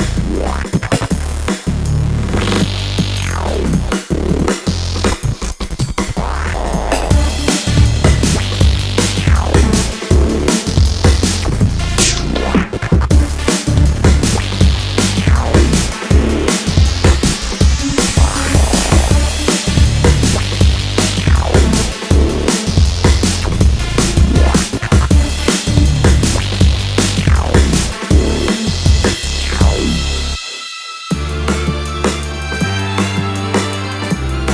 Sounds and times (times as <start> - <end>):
Music: 0.0 - 34.5.